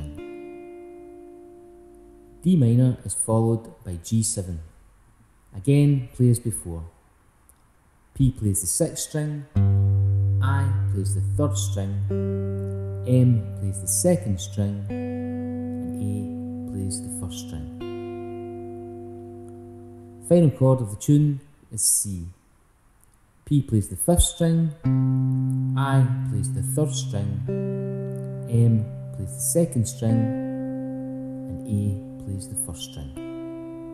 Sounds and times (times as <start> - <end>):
Speech: 0.0 - 0.2, 2.4 - 4.7, 5.6 - 7.0, 8.2 - 9.6, 10.4 - 12.1, 13.1 - 14.9, 15.8 - 17.8, 20.2 - 22.4, 23.5 - 24.8, 25.8 - 27.5, 28.5 - 30.4, 31.5 - 33.2
Guitar: 0.0 - 3.7, 9.3 - 21.5, 24.2 - 33.9.